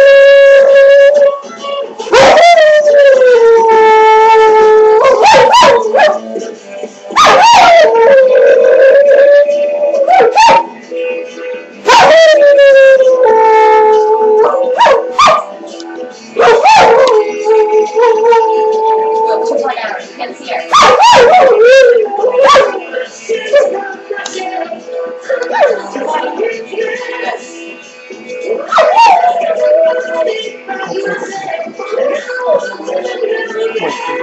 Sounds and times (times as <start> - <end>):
Music: 0.0 - 34.2
Yip: 5.0 - 6.2, 7.2 - 7.9, 10.1 - 10.7, 11.9 - 12.2, 14.4 - 15.5, 16.4 - 17.2, 20.7 - 21.7, 22.4 - 22.8, 28.7 - 29.3
Speech: 19.2 - 20.8.